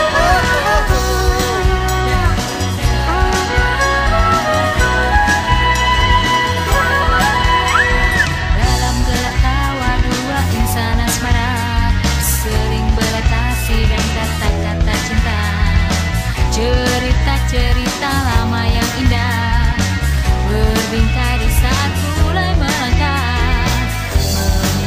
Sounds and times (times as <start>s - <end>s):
Grunge: 0.0s - 24.8s
Jazz: 0.0s - 24.8s
Progressive rock: 0.0s - 24.8s
Punk rock: 0.0s - 24.8s
Rock and roll: 0.0s - 24.8s.